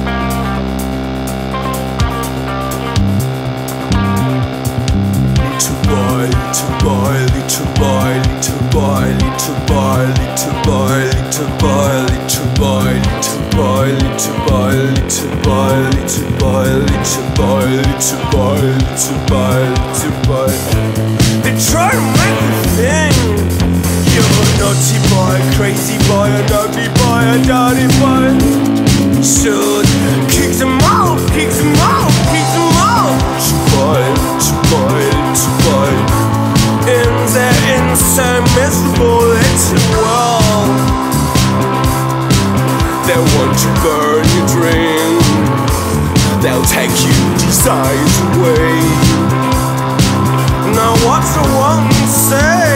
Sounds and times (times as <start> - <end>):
Music: 0.0 - 52.7
Male singing: 5.4 - 28.6, 29.2 - 41.0, 42.9 - 49.6, 50.6 - 52.7.